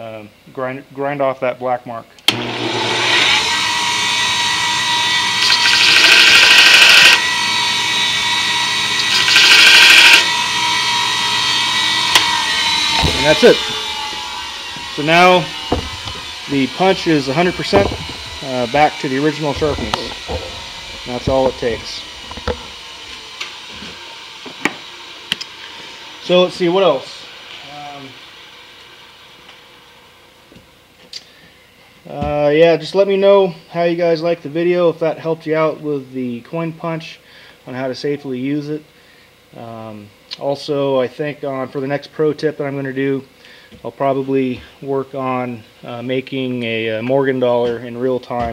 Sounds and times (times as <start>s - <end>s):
Speech: 0.0s - 2.2s, 13.0s - 13.6s, 15.0s - 15.5s, 16.5s - 20.2s, 21.1s - 22.0s, 26.2s - 28.2s, 32.1s - 38.9s, 39.6s - 48.5s.